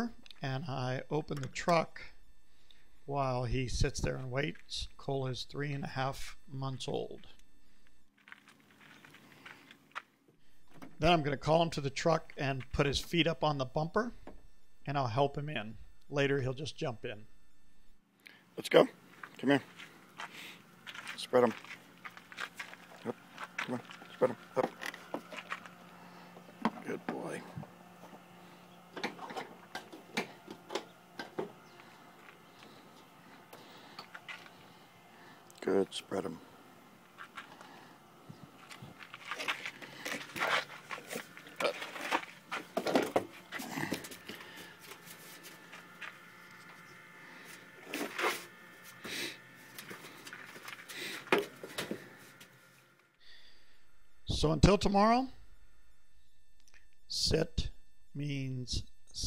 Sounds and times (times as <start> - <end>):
Speech: 0.0 - 2.2, 3.1 - 7.4, 11.0 - 14.2, 14.9 - 17.3, 18.6 - 19.7, 21.2 - 21.6, 26.8 - 27.6, 35.6 - 36.4, 54.3 - 55.4, 57.1 - 59.2.